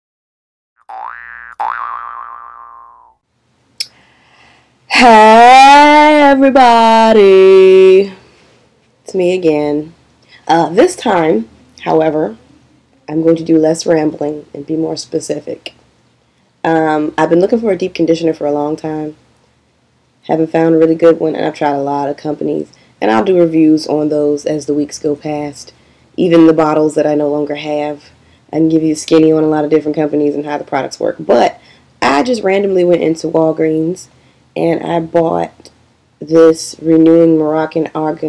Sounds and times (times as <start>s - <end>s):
Boing: 0.8s - 3.2s
Inside, small room: 0.9s - 38.2s
Speech: 4.9s - 8.2s, 9.1s - 12.4s, 13.1s - 15.7s, 16.7s - 19.2s, 20.3s - 38.2s.